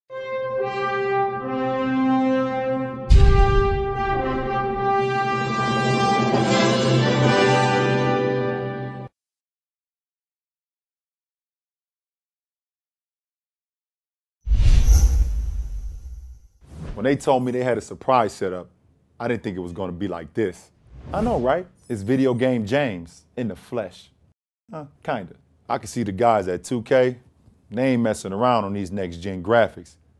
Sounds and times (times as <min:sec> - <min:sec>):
Brass instrument: 0:00.1 - 0:09.1.